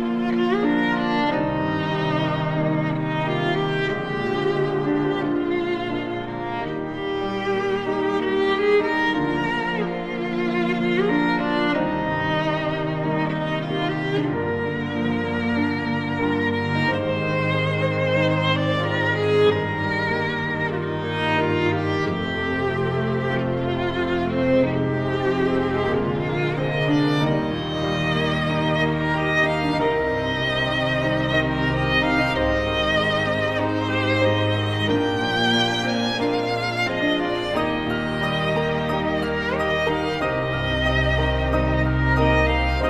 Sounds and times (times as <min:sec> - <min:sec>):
Music: 0:00.0 - 0:42.9.